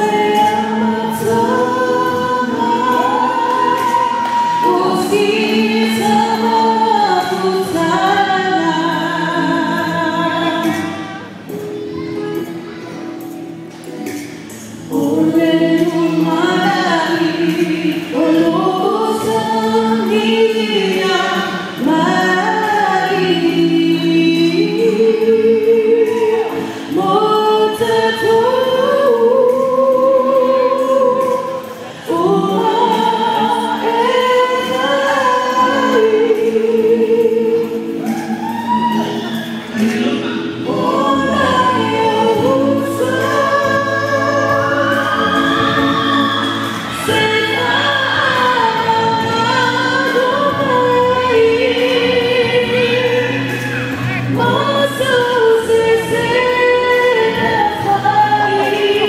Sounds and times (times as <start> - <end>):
Female singing: 0.0 - 12.8, 14.6 - 59.0
Music: 0.0 - 59.0.